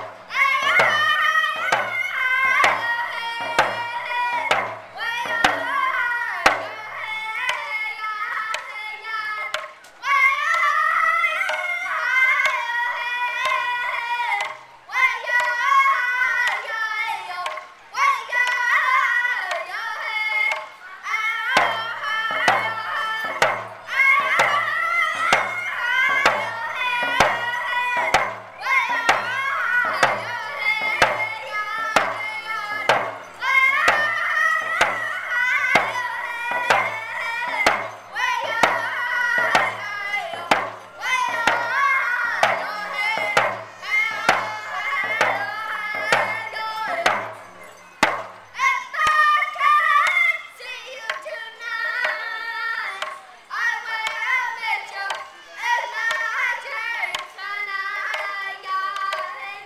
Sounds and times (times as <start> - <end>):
Music: 0.0 - 7.7, 8.4 - 52.4
Outside, urban or manmade: 0.0 - 59.6
Singing: 0.0 - 59.6.